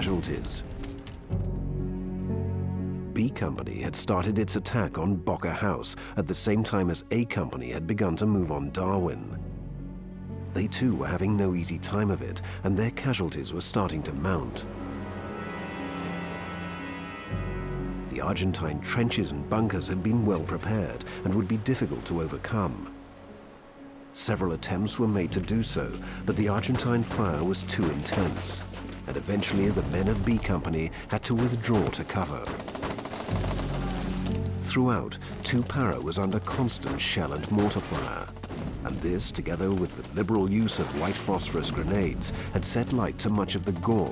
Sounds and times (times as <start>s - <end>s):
Speech: 0.0s - 0.6s, 3.2s - 9.4s, 10.6s - 14.6s, 18.1s - 22.9s, 24.2s - 32.6s, 34.6s - 44.1s
Music: 0.0s - 44.1s.